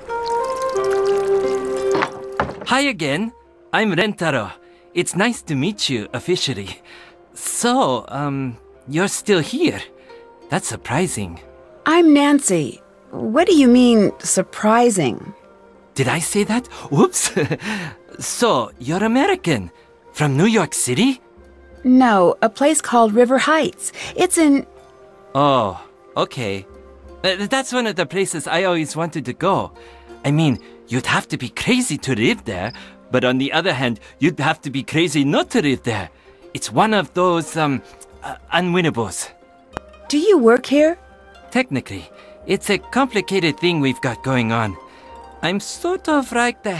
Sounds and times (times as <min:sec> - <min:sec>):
Speech: 0:02.7 - 0:06.8, 0:10.5 - 0:15.3, 0:21.9 - 0:24.6, 0:25.4 - 0:26.7, 0:27.3 - 0:39.3, 0:40.1 - 0:44.8, 0:45.4 - 0:46.8.